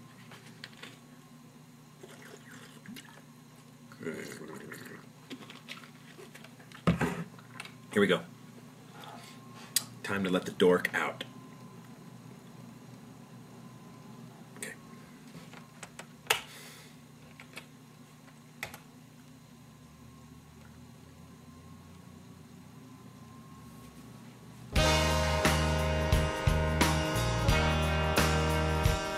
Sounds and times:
Speech: 7.9s - 8.3s, 10.0s - 11.3s.

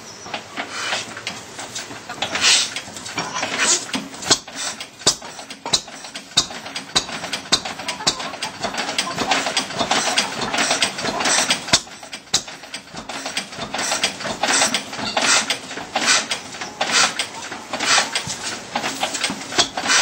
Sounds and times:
Engine starting: 0.0s - 20.0s
Medium engine (mid frequency): 0.0s - 20.0s.

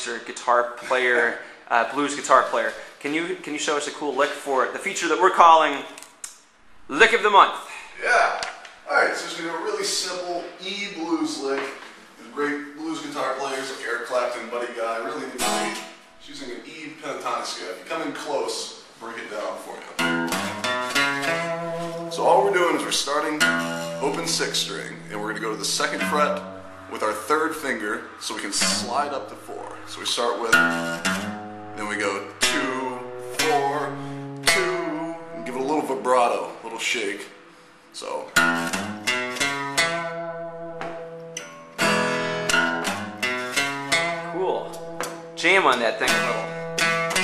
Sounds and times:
Acoustic guitar: 0.0s - 4.5s, 5.3s - 47.2s
Speech: 0.0s - 6.0s, 6.9s - 20.0s, 22.1s - 30.7s, 31.8s - 33.9s, 34.6s - 37.4s, 38.0s - 38.4s, 44.4s - 44.8s, 45.4s - 46.5s
Strum: 12.8s - 17.4s, 20.0s - 36.8s, 38.3s - 47.2s.

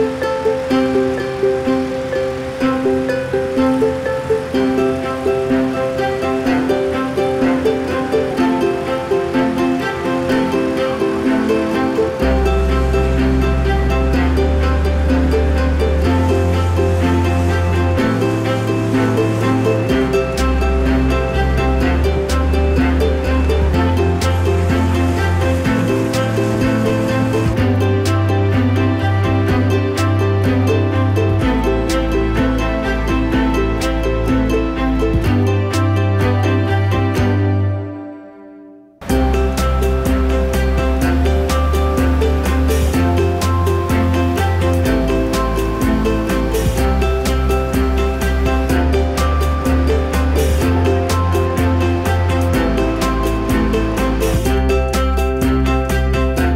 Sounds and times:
Music: 0.0s - 56.5s.

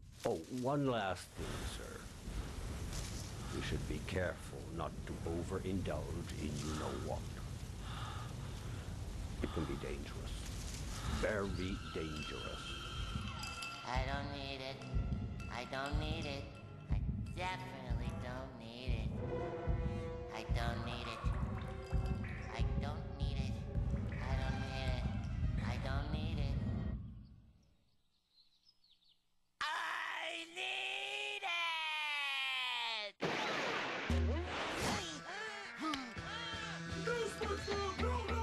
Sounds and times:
Speech: 0.3s - 2.0s, 3.6s - 7.2s, 9.4s - 10.4s, 11.2s - 12.8s, 15.5s - 16.5s, 17.4s - 19.1s, 20.3s - 21.3s, 22.5s - 23.6s, 24.2s - 26.6s, 29.6s - 33.2s
Music: 11.1s - 27.3s, 34.1s - 38.4s.

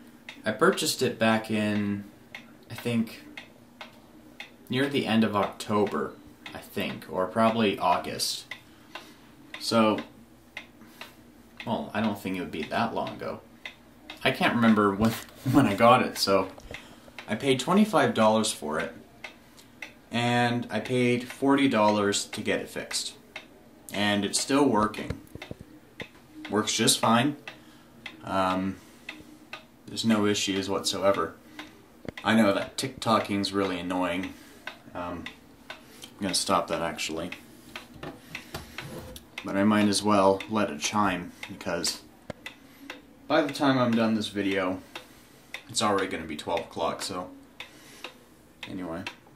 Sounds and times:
Speech: 0.4s - 2.1s, 2.7s - 3.3s, 4.7s - 8.5s, 9.6s - 10.1s, 11.6s - 13.5s, 14.1s - 16.6s, 17.3s - 19.0s, 20.1s - 23.2s, 23.9s - 25.2s, 26.4s - 27.4s, 28.2s - 28.8s, 29.9s - 31.4s, 32.2s - 35.4s, 36.2s - 37.4s, 39.4s - 42.1s, 43.3s - 44.9s, 45.7s - 47.4s, 48.6s - 49.2s.

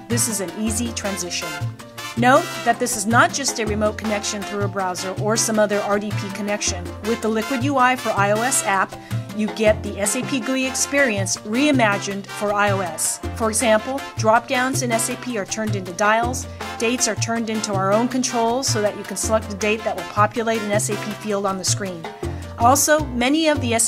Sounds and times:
Music: 0.0s - 23.8s
Speech: 0.1s - 1.6s, 2.2s - 23.8s.

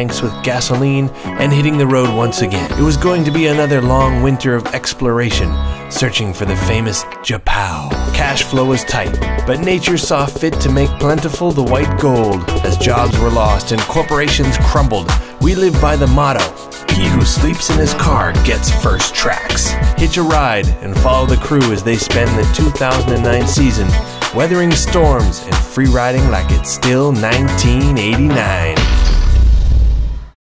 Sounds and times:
Speech: 0.0s - 28.8s
Music: 0.0s - 30.4s.

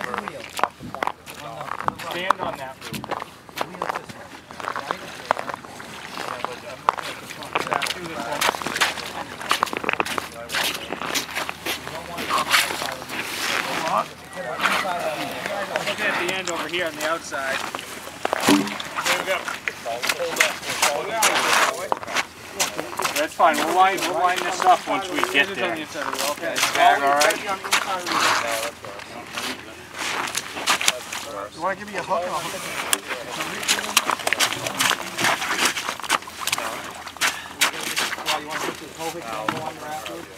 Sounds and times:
Speech: 0.0s - 17.8s, 19.0s - 35.6s, 37.6s - 40.3s.

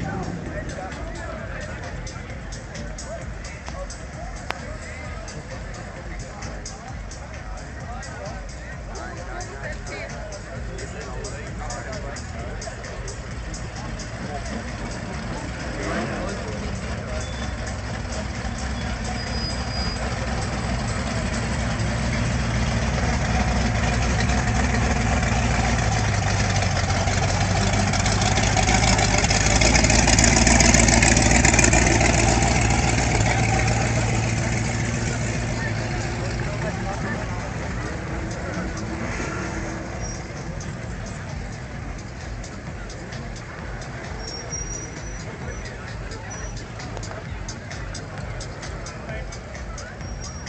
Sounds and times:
Music: 0.0s - 27.7s, 31.2s - 50.4s.

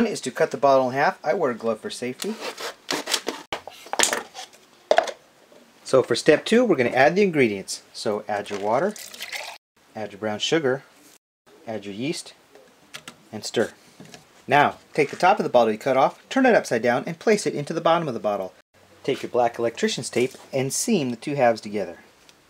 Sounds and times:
Speech: 0.0s - 2.4s, 5.9s - 9.0s, 10.0s - 10.9s, 11.6s - 12.4s, 13.3s - 13.8s, 14.5s - 22.1s.

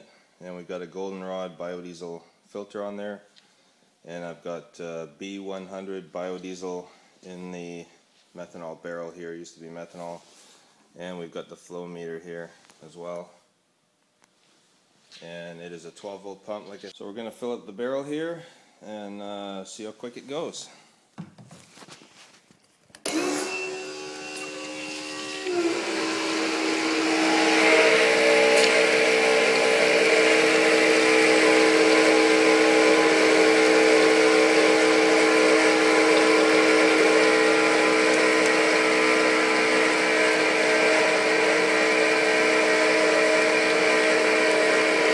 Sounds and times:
Speech: 0.4s - 3.3s, 4.0s - 10.2s, 11.0s - 13.4s, 15.2s - 20.8s.

